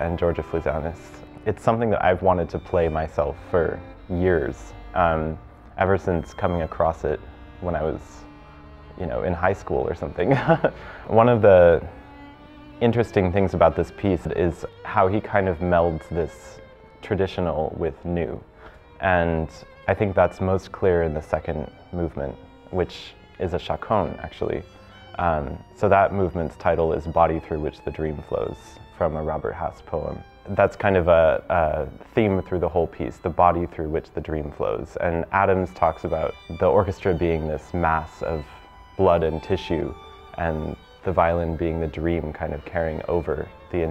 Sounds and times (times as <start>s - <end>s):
Speech: 0.0s - 8.2s, 9.0s - 11.9s, 12.8s - 18.4s, 19.0s - 43.9s
Violin, fiddle: 0.0s - 43.9s.